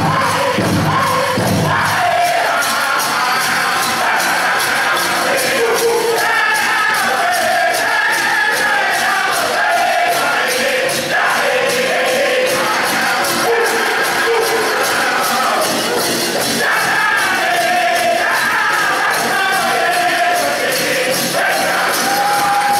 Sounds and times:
Music: 0.0 - 22.7.

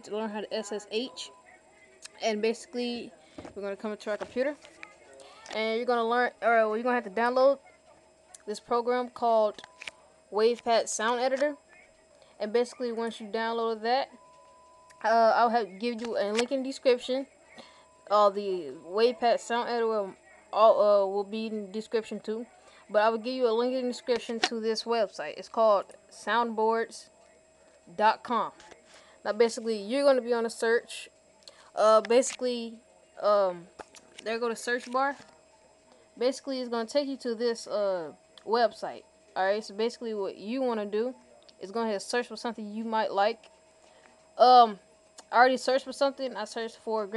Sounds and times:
Speech: 0.0 - 9.7, 10.3 - 14.2, 14.9 - 43.4, 44.4 - 47.1.

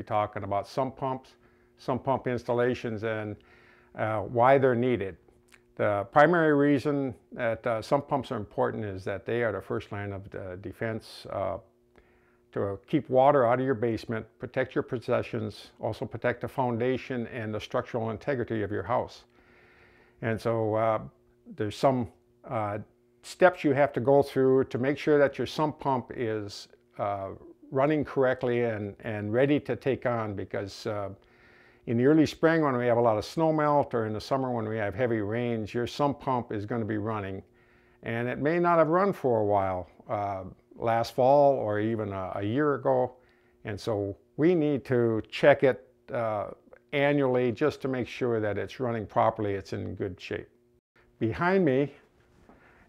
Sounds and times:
Speech: 0.0 - 3.4, 4.0 - 5.2, 5.8 - 11.7, 12.5 - 19.3, 20.2 - 31.2, 31.9 - 50.5, 51.2 - 52.0.

